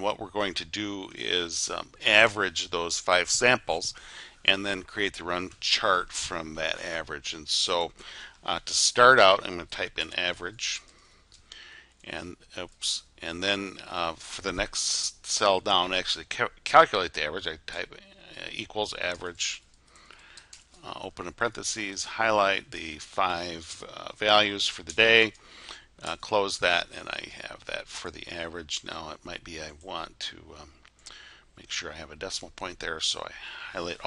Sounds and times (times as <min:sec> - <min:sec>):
Speech: 0:00.0 - 0:10.8, 0:12.0 - 0:19.6, 0:20.8 - 0:25.4, 0:26.0 - 0:30.8, 0:31.6 - 0:34.0.